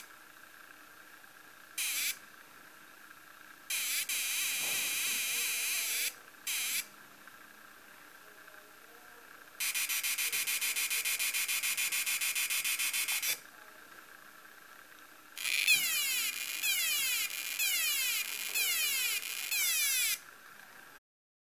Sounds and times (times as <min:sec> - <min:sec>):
Buzz: 0:01.8 - 0:02.2, 0:03.7 - 0:06.9, 0:09.6 - 0:13.4, 0:15.4 - 0:20.3.